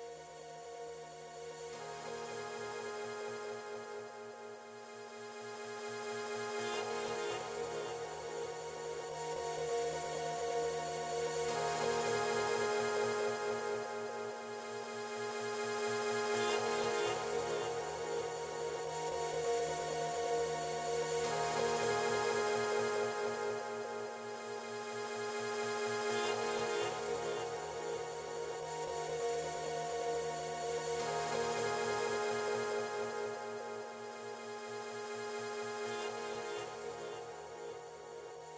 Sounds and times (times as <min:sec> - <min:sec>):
Music: 0:00.0 - 0:38.5.